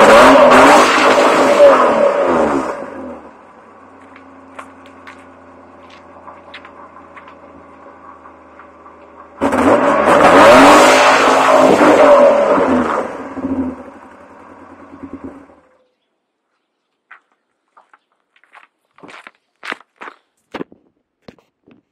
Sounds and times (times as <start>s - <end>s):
Car: 0.0s - 16.0s.